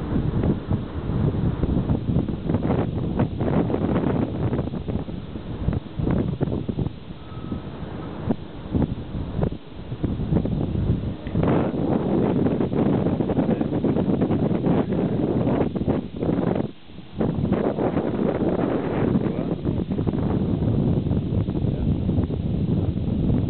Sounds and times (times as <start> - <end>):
Outside, rural or natural: 0.0 - 23.5.